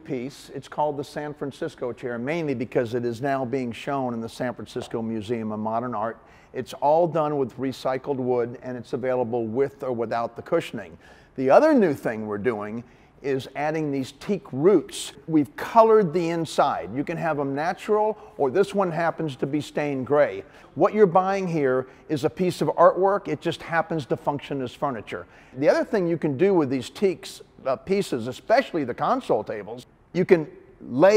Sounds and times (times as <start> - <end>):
Speech: 0.0 - 31.1.